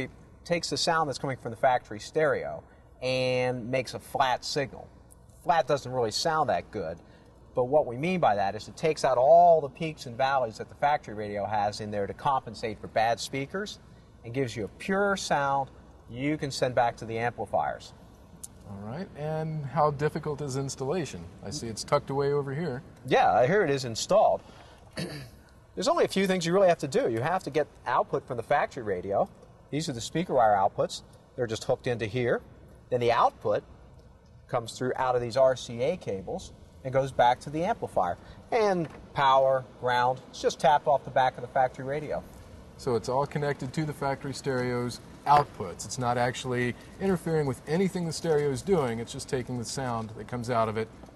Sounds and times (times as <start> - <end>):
Speech: 0.0 - 7.0, 7.6 - 18.0, 18.6 - 24.4, 25.8 - 33.6, 34.5 - 42.2, 42.8 - 50.9.